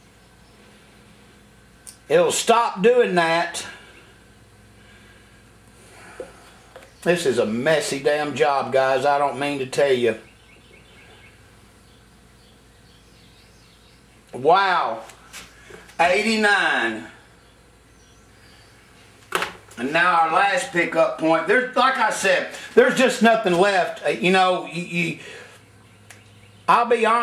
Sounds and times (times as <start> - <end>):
Speech: 2.0 - 3.8, 7.0 - 10.2, 14.4 - 15.1, 16.0 - 17.2, 19.8 - 25.3, 26.7 - 27.2.